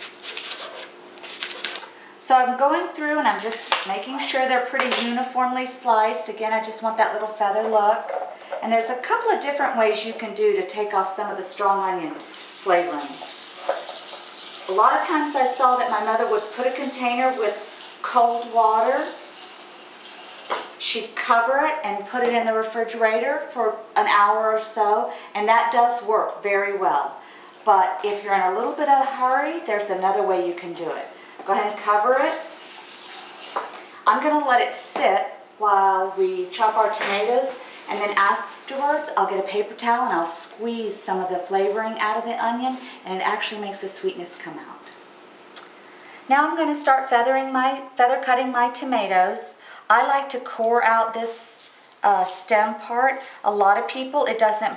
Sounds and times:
Inside, small room: 0.0s - 54.7s
Speech: 2.2s - 13.3s, 14.7s - 19.2s, 20.8s - 32.5s, 34.1s - 45.0s, 46.3s - 54.7s.

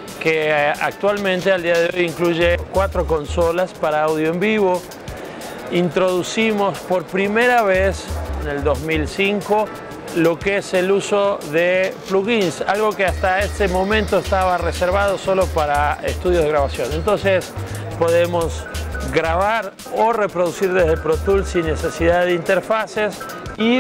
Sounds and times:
Music: 0.0s - 23.8s
Speech: 0.2s - 4.9s, 5.7s - 23.8s.

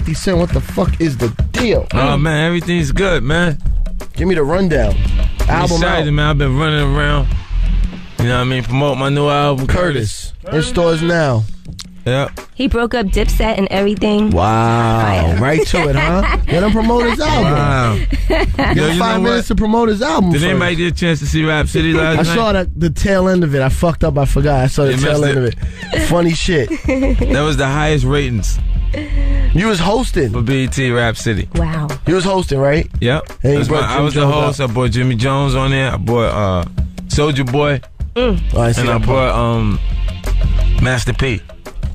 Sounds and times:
Speech: 0.0s - 3.6s, 4.2s - 7.3s, 8.2s - 11.5s, 12.1s - 39.8s, 40.8s - 41.4s
Music: 0.0s - 41.9s.

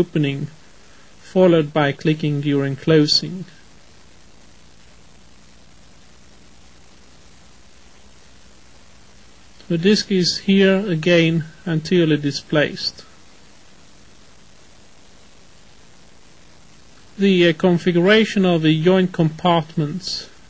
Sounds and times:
Speech: 0.0s - 0.6s, 1.2s - 3.6s, 9.6s - 13.1s, 17.2s - 20.4s.

